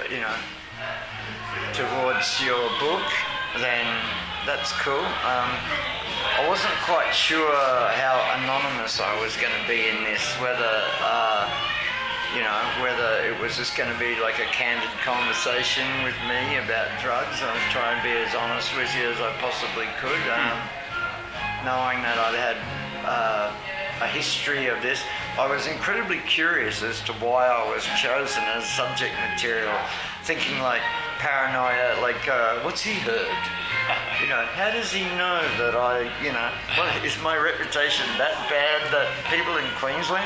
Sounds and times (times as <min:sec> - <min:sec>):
Speech: 0:00.0 - 0:11.7, 0:12.3 - 0:20.7, 0:21.6 - 0:40.2
Music: 0:00.0 - 0:40.2.